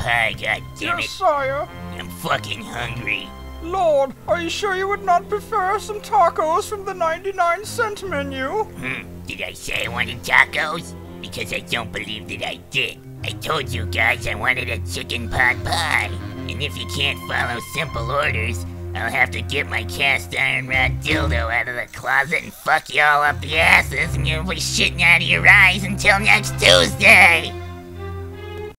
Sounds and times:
Speech: 0.0s - 27.6s
Music: 0.0s - 28.7s.

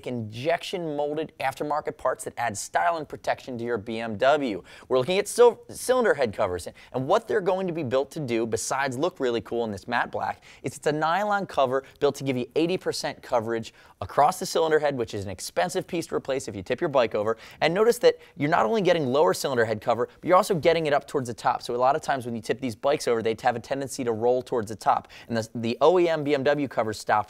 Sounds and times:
Speech: 0.0s - 27.2s.

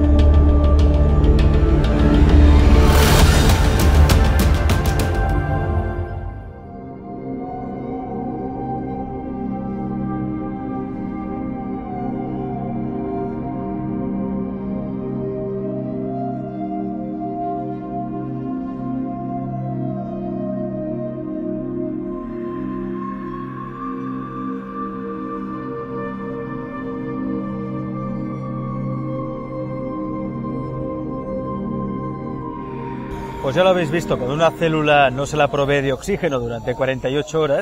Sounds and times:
Ambient music: 0.0s - 37.6s.

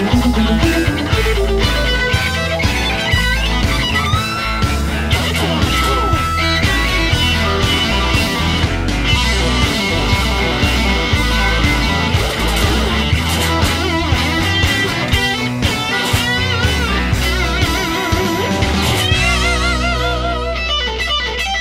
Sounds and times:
Guitar: 0.0s - 21.6s.

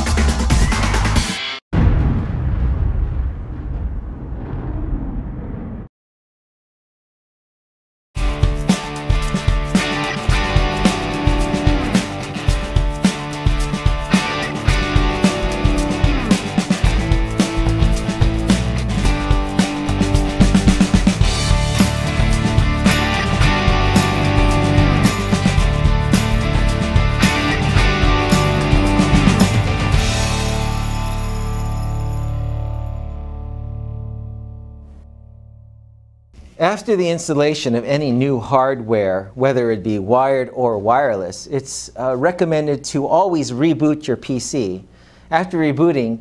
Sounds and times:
Music: 0.0s - 1.6s, 8.2s - 36.3s.

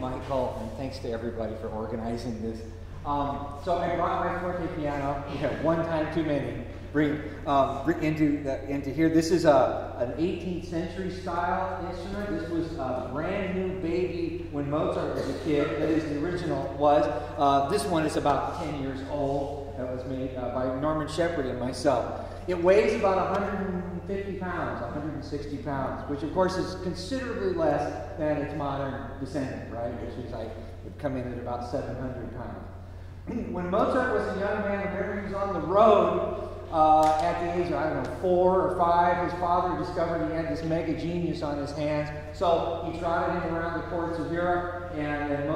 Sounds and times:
Speech: 0.0s - 45.5s.

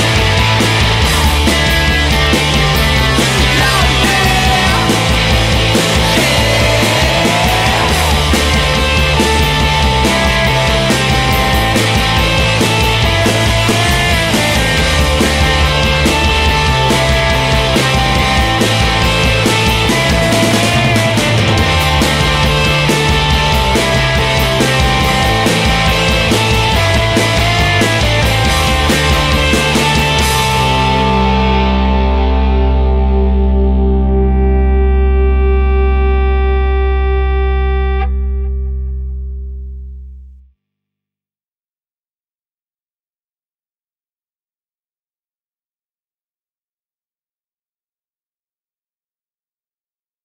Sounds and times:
Music: 0.0s - 40.6s.

